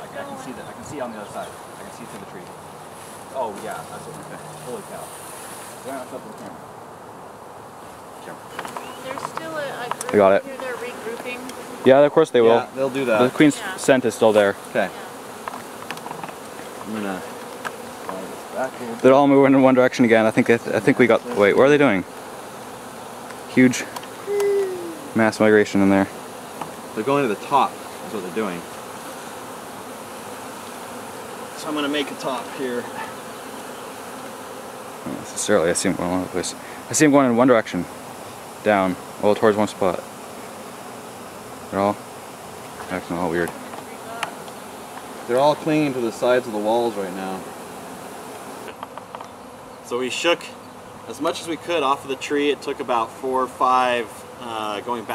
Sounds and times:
Bee, wasp, etc.: 0:00.0 - 0:55.1
Fly, housefly: 0:00.0 - 0:55.1.

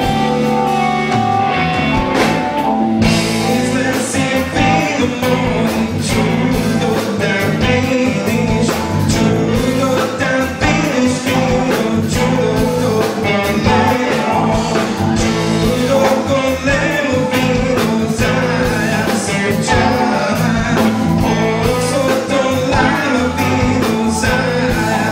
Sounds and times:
Guitar: 0:00.0 - 0:25.1
Rock and roll: 0:00.0 - 0:25.1
Singing: 0:03.3 - 0:25.1.

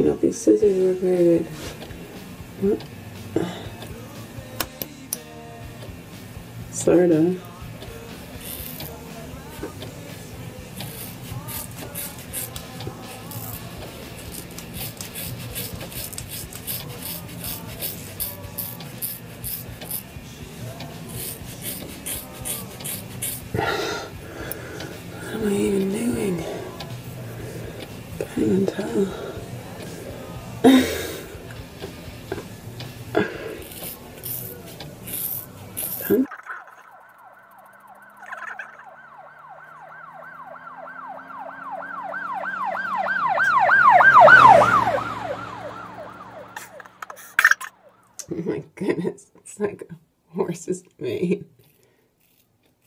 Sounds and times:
Ambulance (siren): 0:36.4 - 0:47.2.

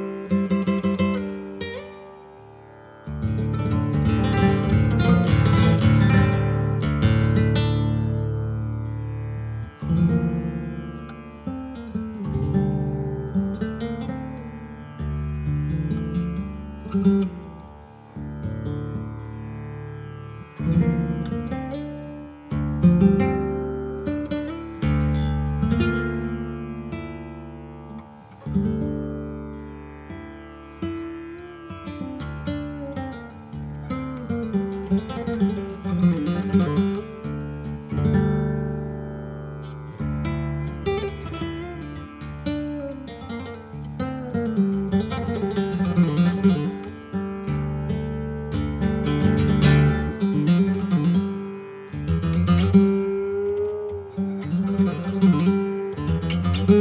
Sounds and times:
Acoustic guitar: 0:00.0 - 0:56.8
Strum: 0:00.0 - 0:56.8.

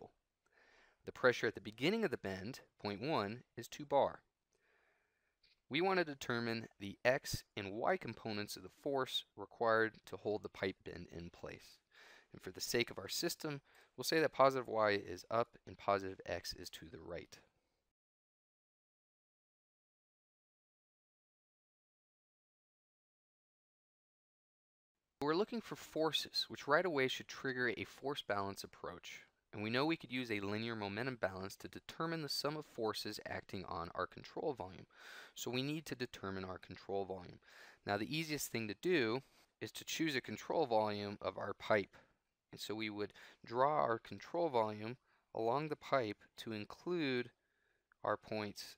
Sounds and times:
Speech: 0:01.1 - 0:04.3, 0:05.7 - 0:11.8, 0:12.4 - 0:17.5, 0:25.2 - 0:42.0, 0:42.6 - 0:47.4, 0:48.0 - 0:48.7.

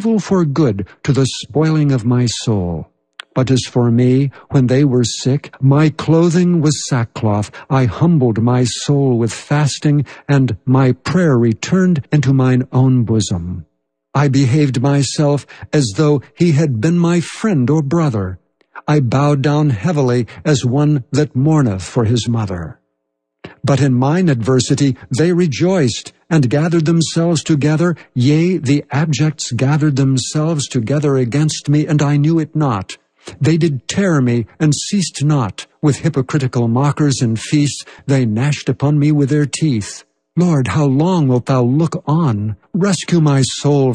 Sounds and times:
Speech synthesizer: 0:00.0 - 0:13.6, 0:23.6 - 0:43.9.

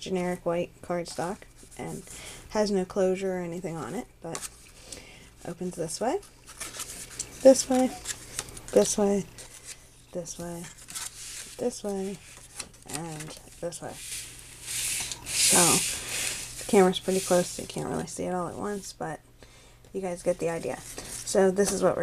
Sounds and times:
Speech: 0:00.0 - 0:04.4, 0:05.4 - 0:06.2, 0:07.4 - 0:08.0, 0:08.7 - 0:09.3, 0:10.2 - 0:10.7, 0:11.6 - 0:12.2, 0:12.9 - 0:14.0, 0:15.5 - 0:15.9, 0:16.7 - 0:19.2, 0:19.9 - 0:22.0.

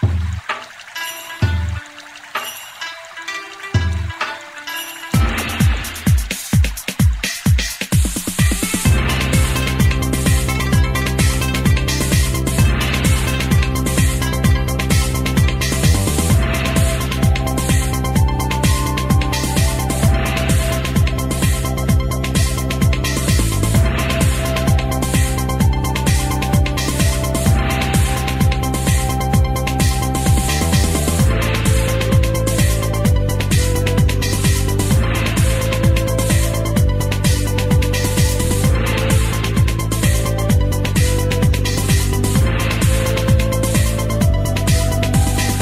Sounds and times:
Music: 0:00.0 - 0:45.6.

